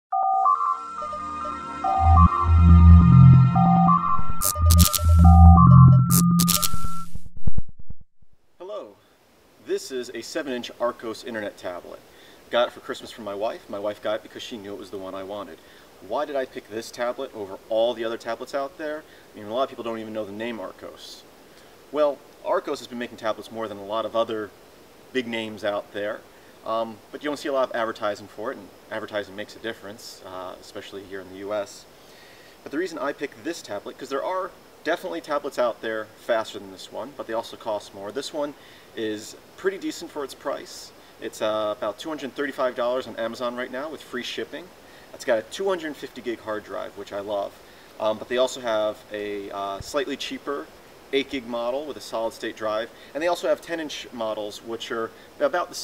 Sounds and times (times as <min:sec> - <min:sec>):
Music: 0:00.1 - 0:07.0
Speech: 0:08.6 - 0:09.0, 0:09.6 - 0:21.3, 0:21.9 - 0:31.9, 0:32.6 - 0:55.8.